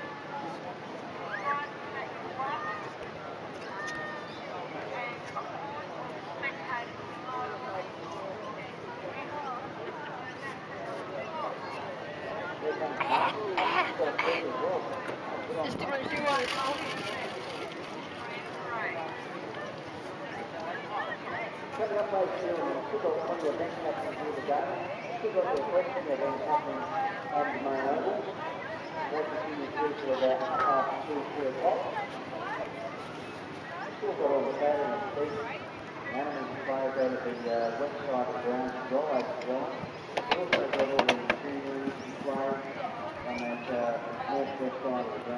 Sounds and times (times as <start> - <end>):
Speech: 33.6 - 45.3.